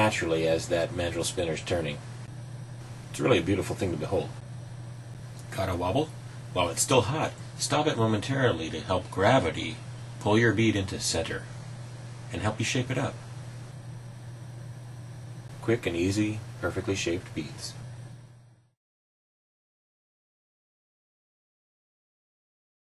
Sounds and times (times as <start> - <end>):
Speech: 0.0 - 2.1, 3.1 - 4.4, 5.5 - 11.5, 12.3 - 13.2, 15.6 - 17.8.